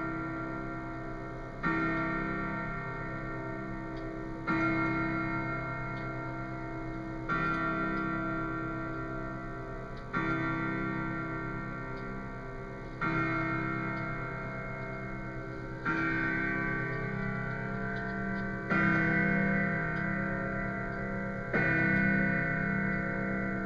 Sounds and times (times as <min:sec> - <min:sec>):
Tick-tock: 0:00.0 - 0:23.6.